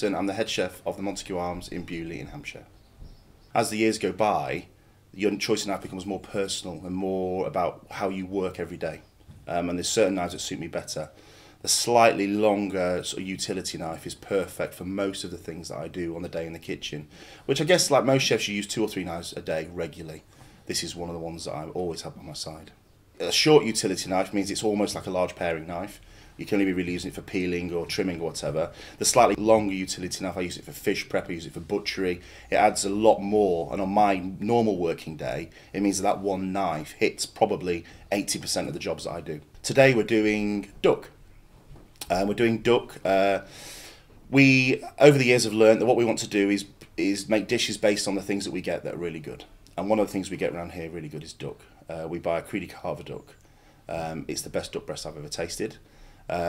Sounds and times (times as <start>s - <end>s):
Speech: 0.0s - 2.7s, 3.5s - 41.2s, 42.0s - 43.5s, 44.3s - 56.4s.